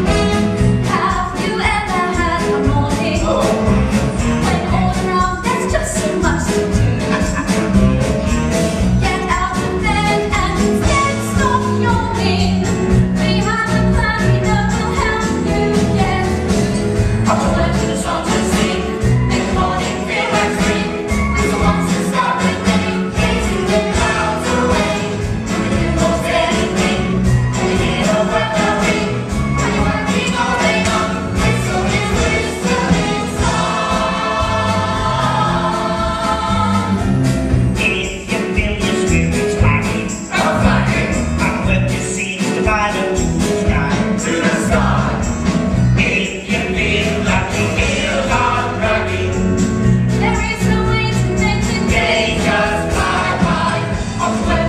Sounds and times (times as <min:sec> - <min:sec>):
Music: 0:00.0 - 0:54.6.